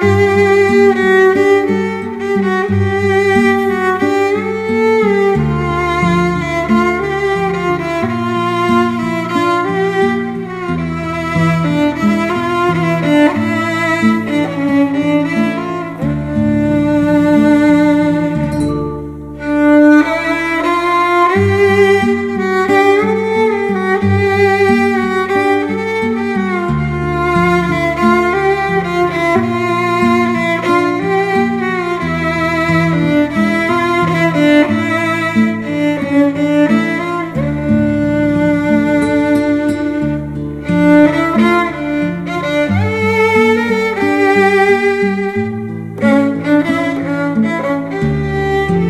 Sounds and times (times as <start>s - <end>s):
Violin, fiddle: 0.0s - 48.9s.